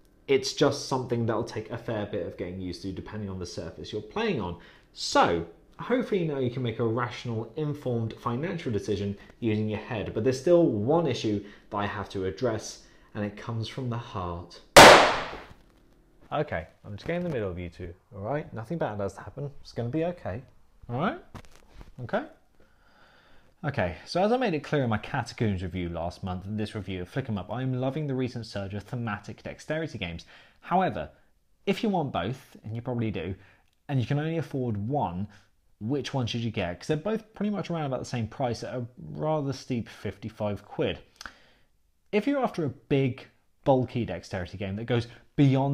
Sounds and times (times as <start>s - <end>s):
Gunshot, gunfire: 14.8s - 15.5s.